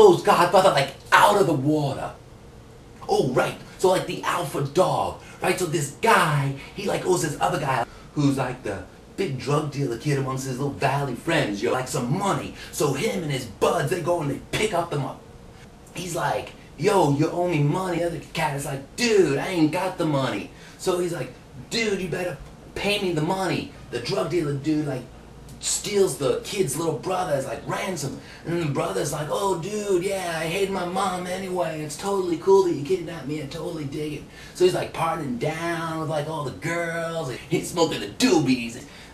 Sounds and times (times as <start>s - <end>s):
Speech: 0.0s - 2.2s, 3.0s - 15.2s, 15.9s - 39.1s.